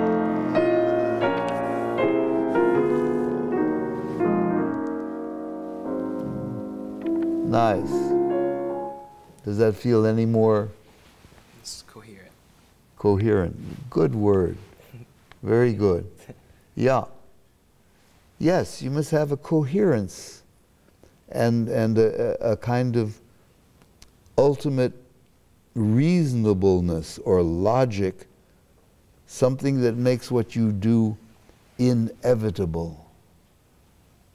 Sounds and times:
Music: 0:00.0 - 0:09.4
Speech: 0:07.5 - 0:08.1, 0:09.4 - 0:10.8, 0:11.6 - 0:12.4, 0:13.0 - 0:17.2, 0:18.4 - 0:20.5, 0:21.3 - 0:23.2, 0:24.4 - 0:25.0, 0:25.8 - 0:28.3, 0:29.3 - 0:33.1.

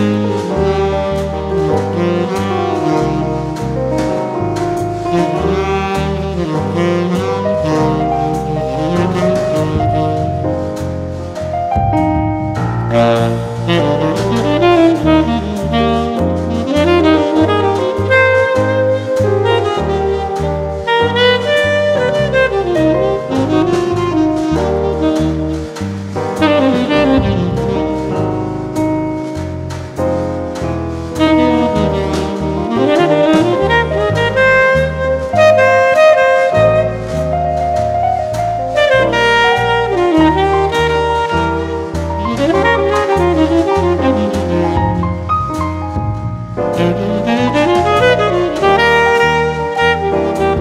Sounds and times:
Music: 0:00.0 - 0:50.6.

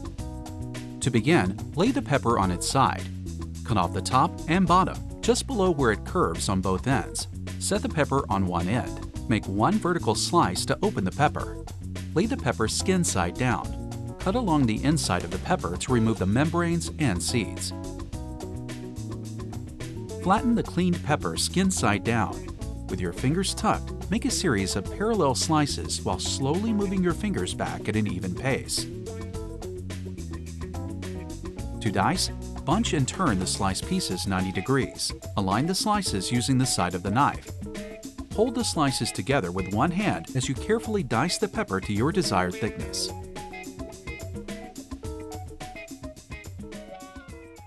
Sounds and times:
Music: 0:00.0 - 0:47.6
Speech: 0:01.0 - 0:03.1, 0:03.7 - 0:11.6, 0:12.2 - 0:17.8, 0:20.2 - 0:28.9, 0:31.8 - 0:37.5, 0:38.4 - 0:43.2.

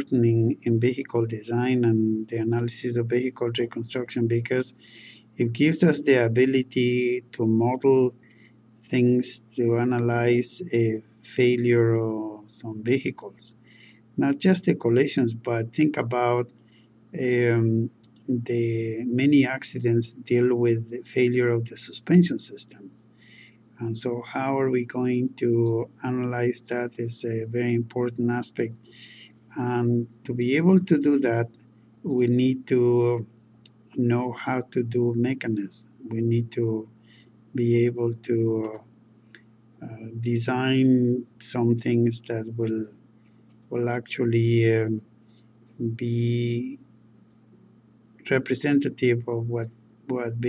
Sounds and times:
Speech: 0:00.0 - 0:08.1, 0:08.9 - 0:13.6, 0:14.2 - 0:16.5, 0:17.2 - 0:22.9, 0:23.8 - 0:31.5, 0:32.1 - 0:36.9, 0:37.6 - 0:38.8, 0:39.8 - 0:42.9, 0:43.8 - 0:45.0, 0:45.8 - 0:46.8, 0:48.3 - 0:50.4.

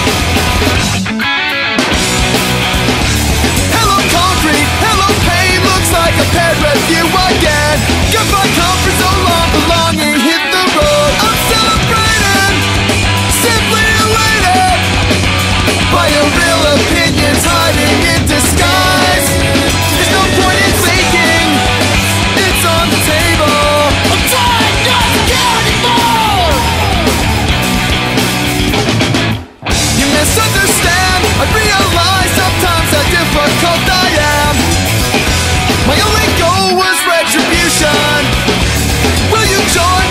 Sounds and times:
Music: 0:00.0 - 0:40.1.

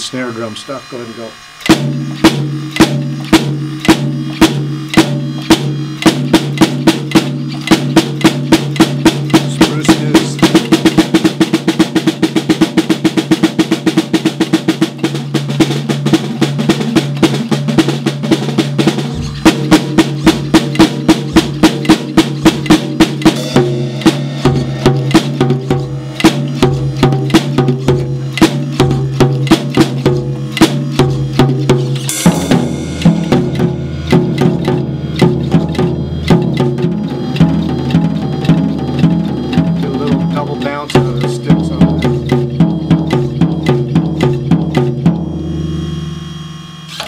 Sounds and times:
Drum kit: 0:00.0 - 0:46.2
Drum: 0:00.0 - 0:46.4.

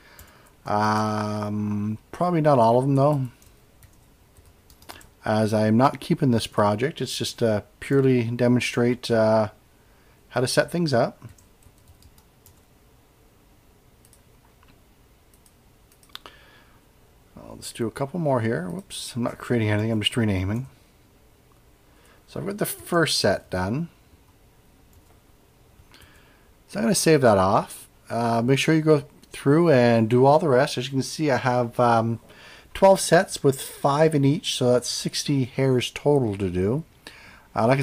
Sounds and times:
Speech: 0:00.7 - 0:03.4, 0:05.2 - 0:09.6, 0:10.3 - 0:11.3, 0:17.4 - 0:20.8, 0:22.3 - 0:24.0, 0:26.7 - 0:32.2, 0:32.8 - 0:36.9, 0:37.6 - 0:37.8
Computer keyboard: 0:03.0 - 0:05.1, 0:11.2 - 0:12.7.

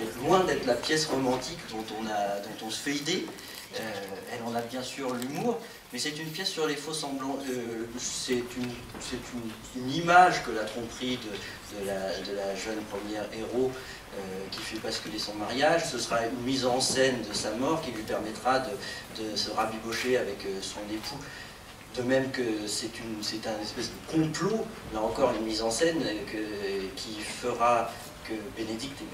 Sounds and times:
Speech: 0:00.0 - 0:21.3, 0:21.9 - 0:29.1.

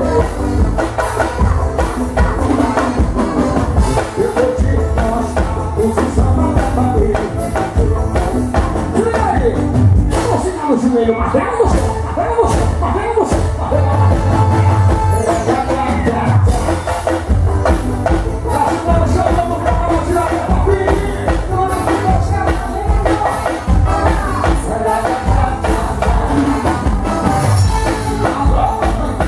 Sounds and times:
Music: 0:00.0 - 0:29.2.

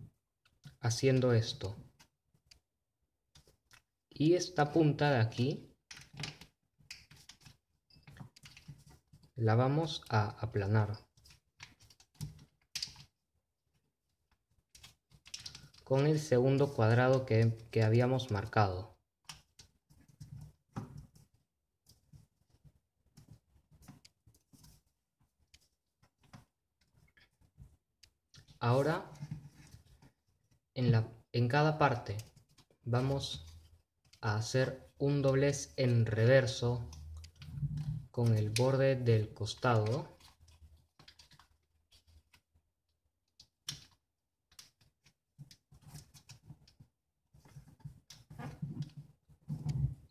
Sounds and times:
Speech: 0:00.8 - 0:01.8, 0:04.2 - 0:05.7, 0:09.4 - 0:11.1, 0:15.9 - 0:19.0, 0:28.6 - 0:29.2, 0:30.8 - 0:32.3, 0:32.9 - 0:33.5, 0:34.2 - 0:36.9, 0:38.2 - 0:40.2.

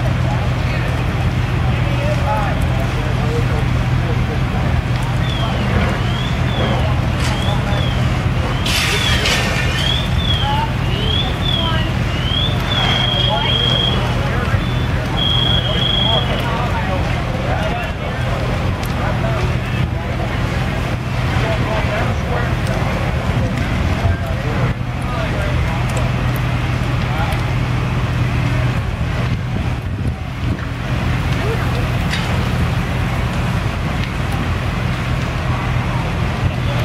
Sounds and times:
Speech: 0:00.0 - 0:36.8.

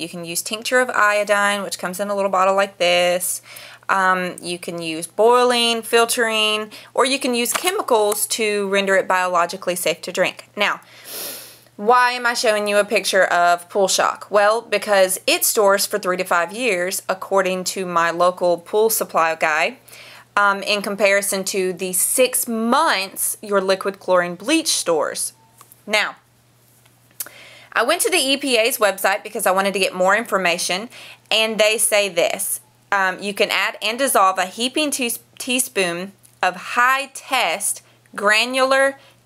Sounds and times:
Speech: 0:00.0 - 0:10.8, 0:11.8 - 0:19.8, 0:20.4 - 0:26.2, 0:27.8 - 0:39.0.

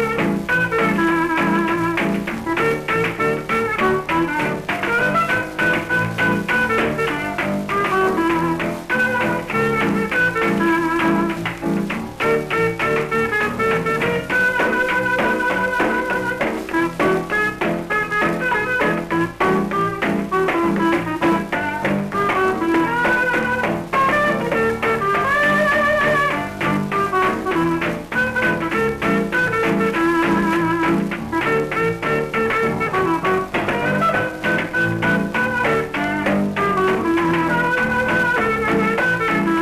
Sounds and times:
Music: 0:00.0 - 0:39.6.

